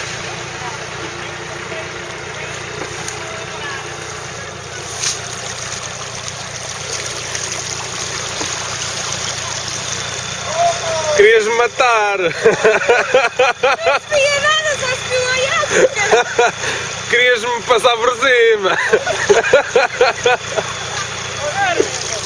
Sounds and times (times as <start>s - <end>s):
Stream: 2.1s - 22.2s.